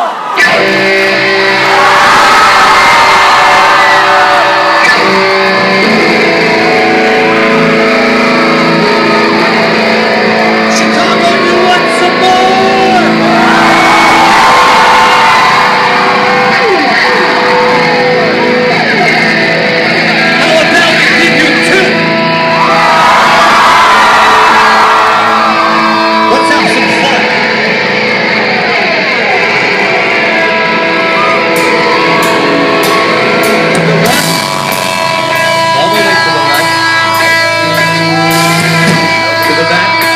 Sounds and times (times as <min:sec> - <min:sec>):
Music: 0:00.0 - 0:40.1.